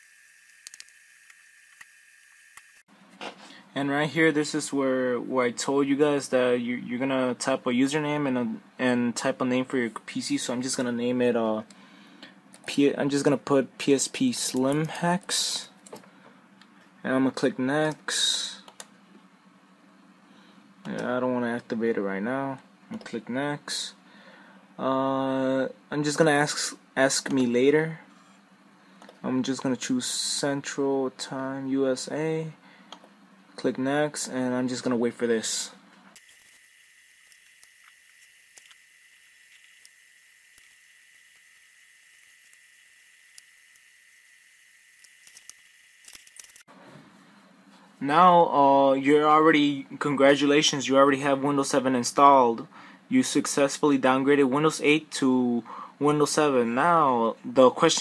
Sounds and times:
Speech: 3.8 - 11.7, 12.7 - 15.8, 17.0 - 18.7, 20.9 - 24.0, 24.8 - 28.1, 29.2 - 32.6, 33.6 - 35.8, 48.0 - 58.0.

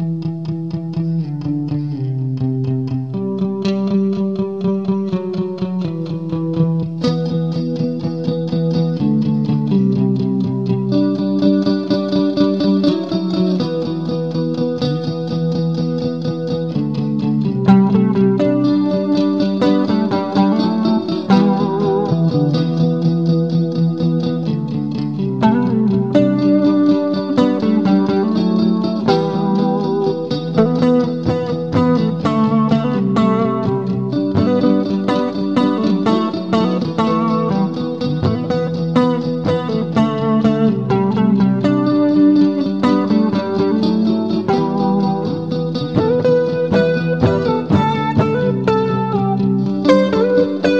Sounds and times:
Electric guitar: 0.0 - 50.7.

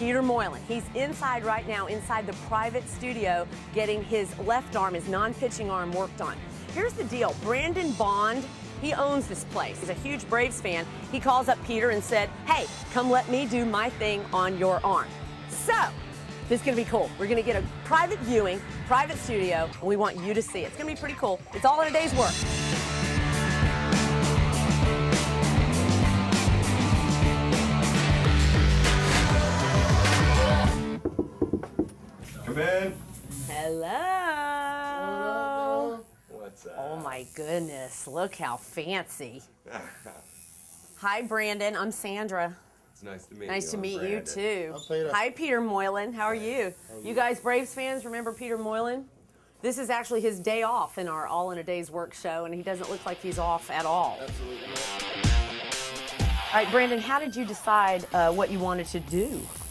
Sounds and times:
Female speech, woman speaking: 0.0 - 15.9, 16.5 - 22.4, 33.4 - 36.0, 37.0 - 39.4, 41.0 - 42.6, 43.5 - 54.2, 56.6 - 59.5.

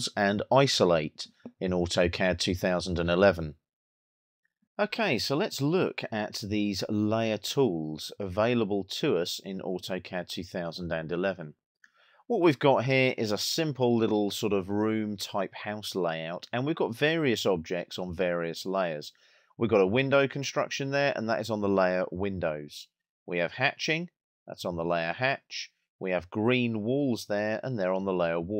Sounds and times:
Speech: 0.0 - 3.6, 4.8 - 11.6, 12.3 - 28.6.

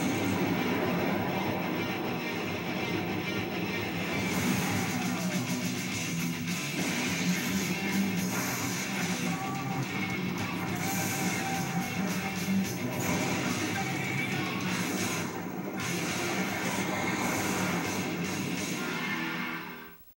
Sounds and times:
Electric guitar: 0.0 - 20.0.

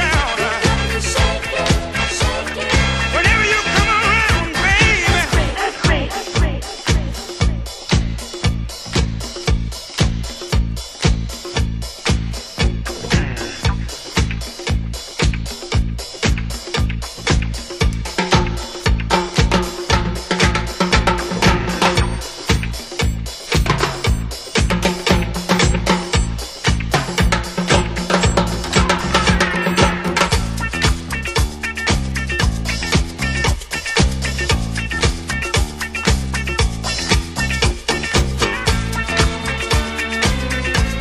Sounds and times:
Disco: 0.0 - 41.0.

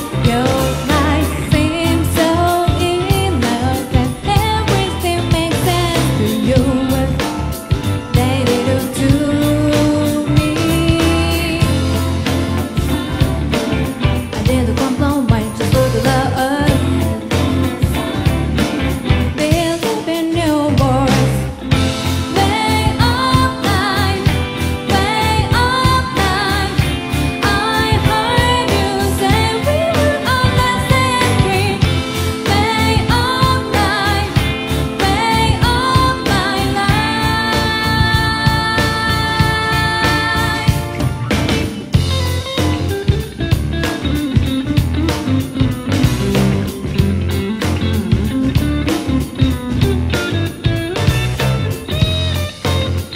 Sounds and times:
Pop music: 0.0 - 43.2
Jingle (music): 0.0 - 53.1
Ska: 0.0 - 53.1.

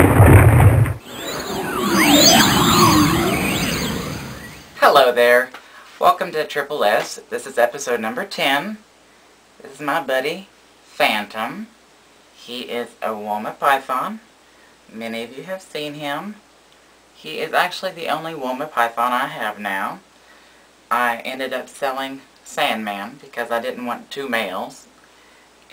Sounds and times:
Inside, small room: 0.0 - 25.7
Speech: 4.8 - 8.8, 9.6 - 11.8, 12.4 - 14.3, 14.9 - 16.4, 17.2 - 20.1, 20.9 - 25.0.

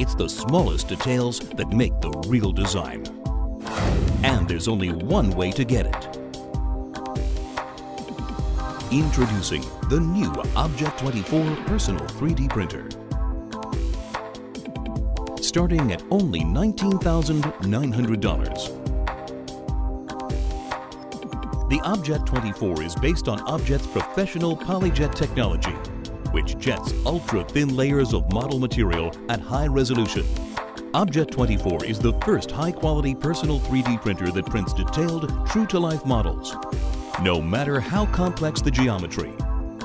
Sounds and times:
Speech: 0.0 - 3.1, 4.2 - 6.1, 8.8 - 13.0, 15.4 - 18.8, 21.7 - 30.3, 31.0 - 36.6, 37.2 - 39.4
Music: 0.0 - 39.8.

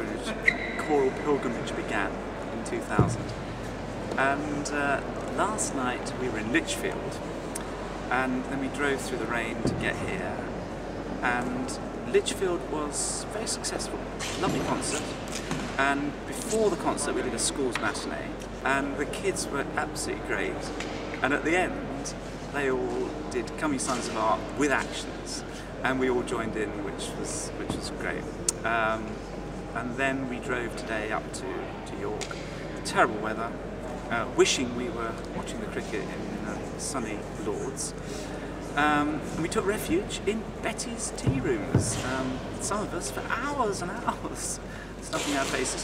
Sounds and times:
Speech: 0.0 - 3.3, 4.2 - 7.2, 8.1 - 10.6, 11.2 - 15.2, 15.8 - 29.2, 29.8 - 38.0, 38.7 - 45.8.

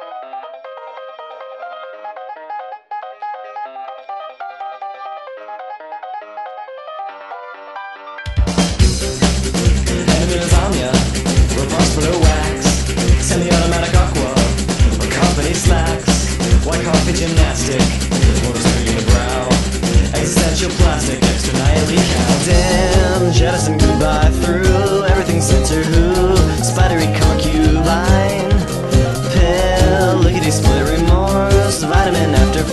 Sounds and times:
Music: 0.0 - 32.7.

